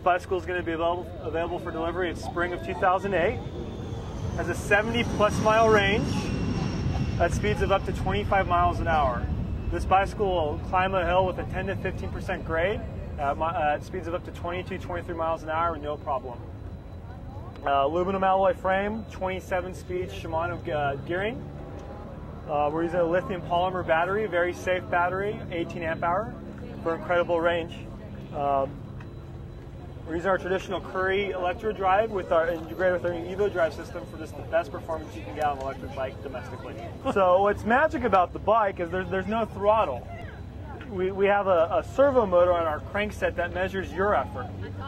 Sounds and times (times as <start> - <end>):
Speech: 0.0 - 3.6, 4.4 - 6.4, 7.1 - 16.5, 17.6 - 21.4, 22.5 - 28.8, 30.0 - 40.1, 40.7 - 44.8
Vehicle: 0.0 - 44.8.